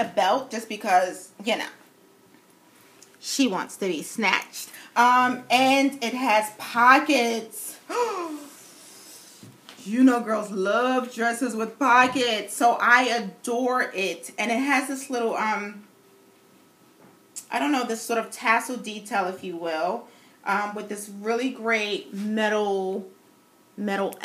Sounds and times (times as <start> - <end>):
Speech: 0.0 - 1.8, 3.2 - 8.5, 9.8 - 15.9, 17.4 - 23.1, 23.8 - 24.2.